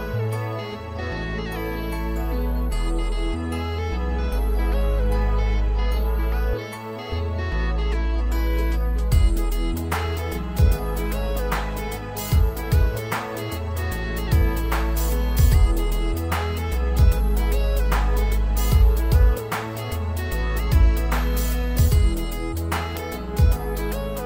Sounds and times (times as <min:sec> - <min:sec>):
Music: 0:00.0 - 0:24.2.